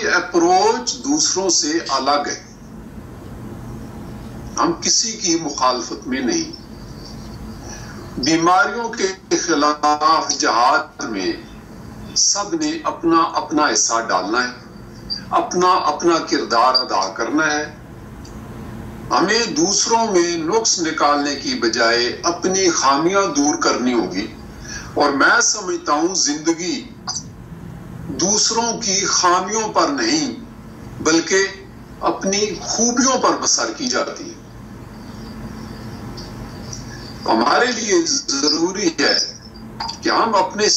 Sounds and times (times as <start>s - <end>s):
Speech: 0.0s - 2.5s, 4.6s - 6.6s, 8.2s - 11.5s, 12.2s - 14.6s, 15.3s - 17.8s, 19.1s - 24.4s, 25.0s - 27.2s, 28.1s - 30.4s, 31.0s - 34.4s, 37.2s - 40.7s.